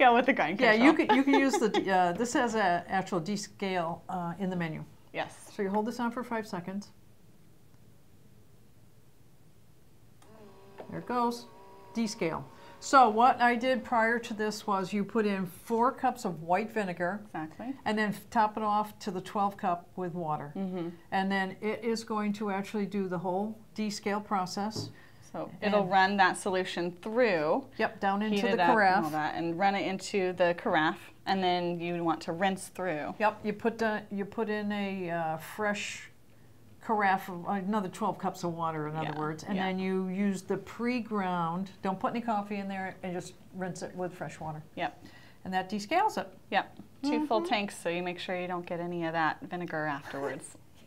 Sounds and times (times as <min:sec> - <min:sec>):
Speech: 0:00.0 - 0:07.0, 0:12.0 - 0:36.1, 0:36.8 - 0:50.6.